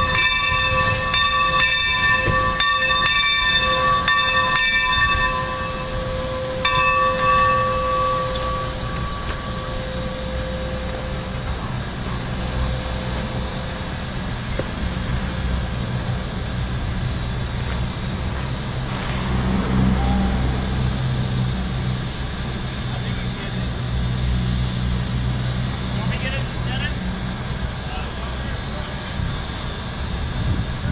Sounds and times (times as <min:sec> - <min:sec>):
Hiss: 0:00.0 - 0:30.9.